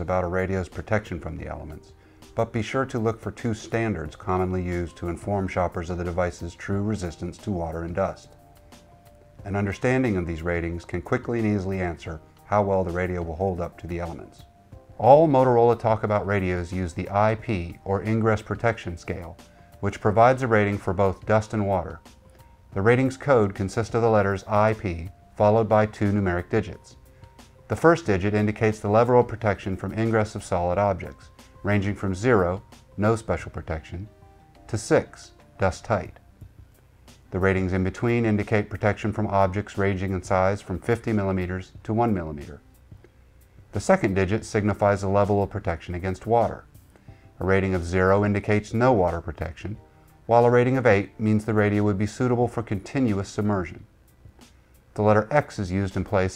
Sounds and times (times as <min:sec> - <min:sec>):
Speech: 0:00.0 - 0:08.3, 0:09.4 - 0:22.1, 0:22.7 - 0:27.0, 0:27.7 - 0:34.1, 0:34.7 - 0:36.2, 0:37.3 - 0:42.6, 0:43.8 - 0:46.7, 0:47.4 - 0:53.9, 0:55.0 - 0:56.3
Music: 0:00.0 - 0:56.3.